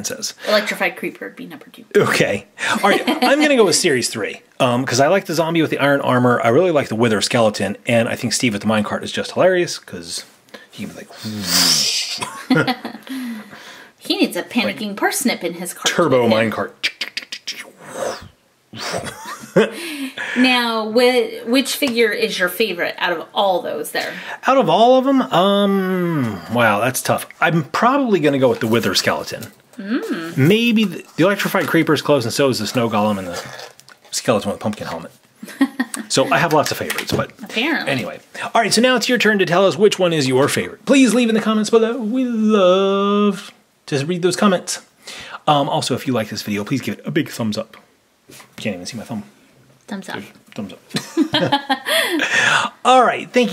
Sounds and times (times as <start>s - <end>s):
Speech: 0.0s - 11.9s, 20.4s - 35.1s, 36.1s - 44.8s, 52.8s - 53.5s
Inside, small room: 0.0s - 53.5s.